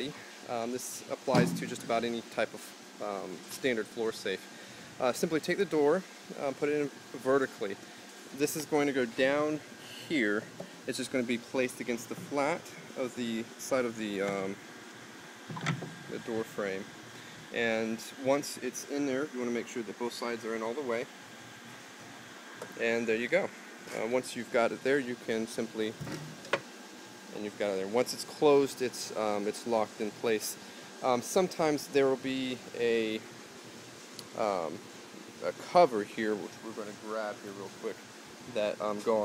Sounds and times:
Speech: 0:00.0 - 0:14.6, 0:16.1 - 0:16.9, 0:17.5 - 0:21.1, 0:22.7 - 0:26.0, 0:27.3 - 0:33.2, 0:34.3 - 0:34.8, 0:35.4 - 0:39.2.

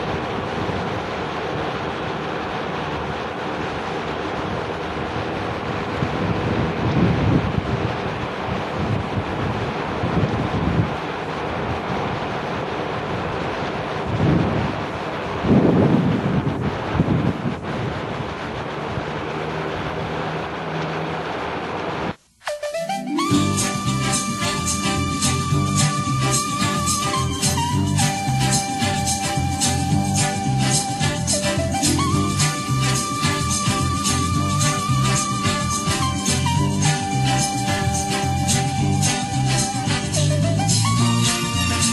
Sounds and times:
Mechanical fan: 0:00.0 - 0:22.4, 0:23.3 - 0:41.9.

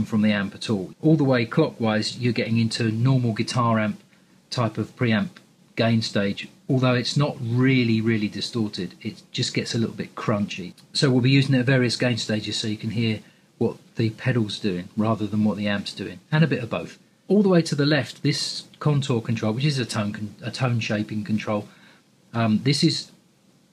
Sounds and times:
Speech: 0:00.0 - 0:21.7, 0:22.3 - 0:23.2.

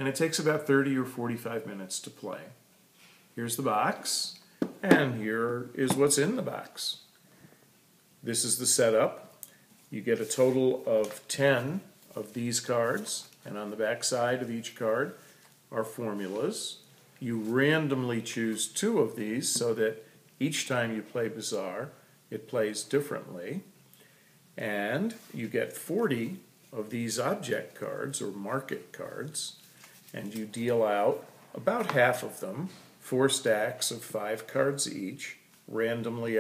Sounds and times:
Speech: 0:00.0 - 0:02.6, 0:03.4 - 0:07.0, 0:08.2 - 0:09.3, 0:09.9 - 0:23.7, 0:24.6 - 0:36.4.

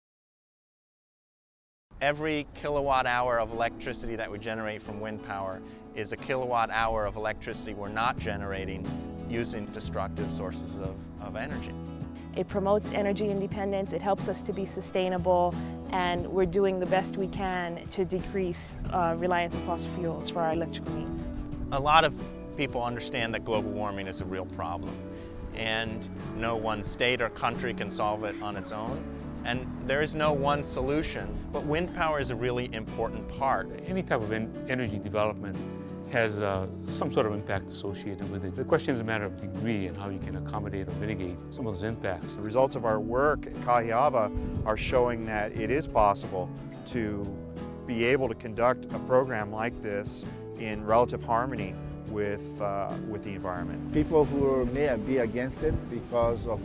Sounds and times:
Music: 0:01.9 - 0:56.6
Speech: 0:02.0 - 0:11.7, 0:12.4 - 0:24.9, 0:25.6 - 0:47.3, 0:47.9 - 0:56.6.

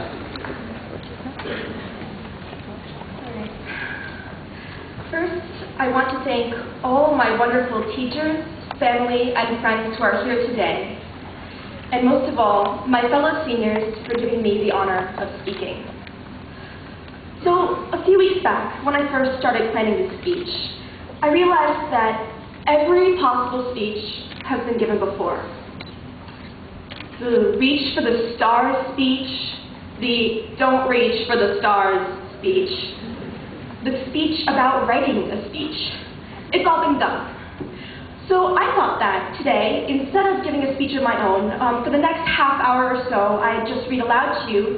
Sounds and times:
Narration, monologue: 0:03.0 - 0:44.7
Female speech, woman speaking: 0:05.1 - 0:11.0, 0:11.9 - 0:15.9, 0:17.4 - 0:25.6, 0:27.2 - 0:33.0, 0:33.9 - 0:37.3, 0:38.3 - 0:44.7.

